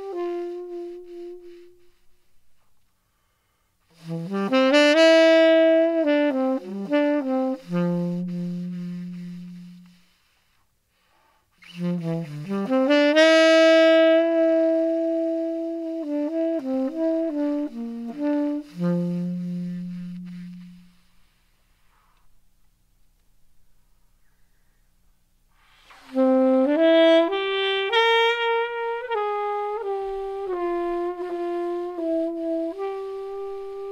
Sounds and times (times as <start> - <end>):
Jazz: 0.0 - 2.9, 3.9 - 22.5, 23.1 - 33.9
Saxophone: 0.0 - 2.9, 3.8 - 22.3, 25.5 - 33.9.